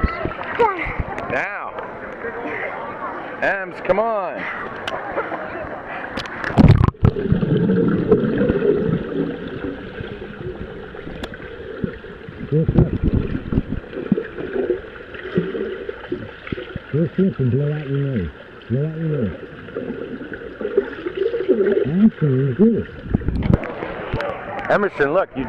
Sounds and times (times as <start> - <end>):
Stream: 0.0 - 25.4.